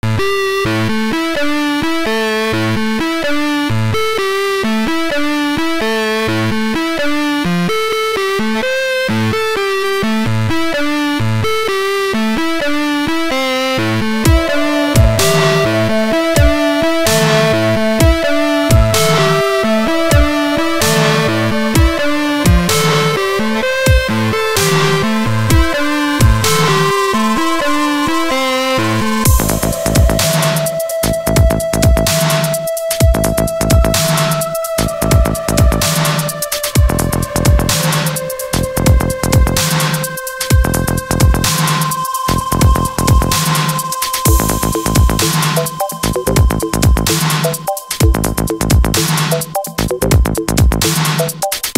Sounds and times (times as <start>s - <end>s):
Music: 0.0s - 51.7s.